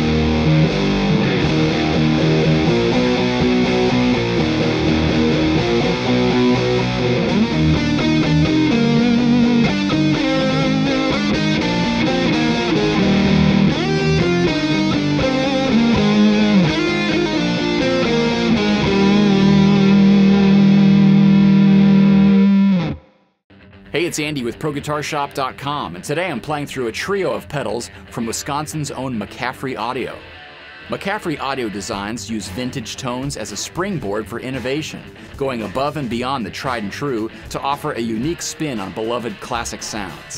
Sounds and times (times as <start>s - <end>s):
Electric guitar: 0.0s - 24.0s, 24.8s - 40.3s.